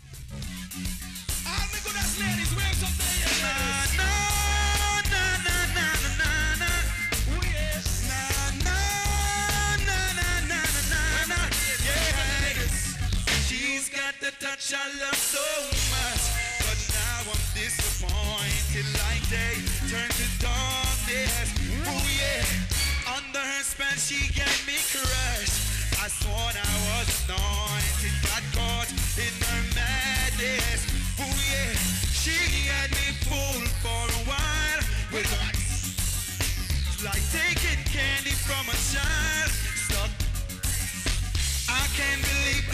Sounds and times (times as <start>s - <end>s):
Blues: 0.0s - 14.1s, 15.0s - 42.7s.